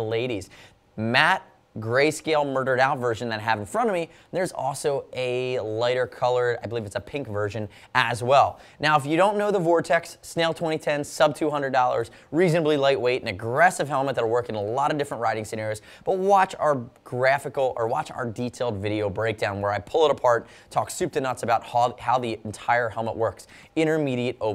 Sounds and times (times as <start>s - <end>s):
Speech: 0.0s - 24.5s.